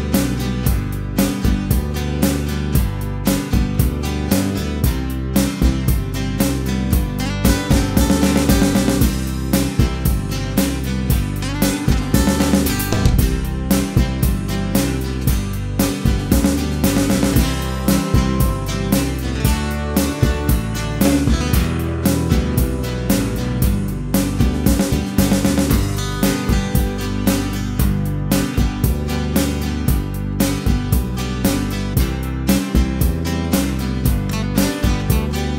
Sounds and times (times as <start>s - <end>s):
Music: 0.0s - 35.5s.